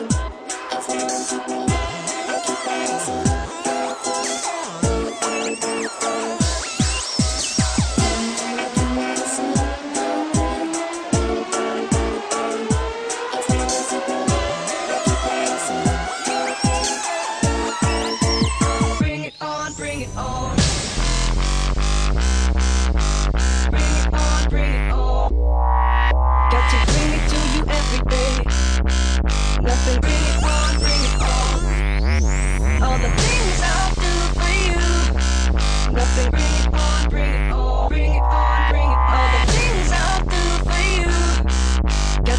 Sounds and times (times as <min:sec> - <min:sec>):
Dubstep: 0:00.0 - 0:42.3.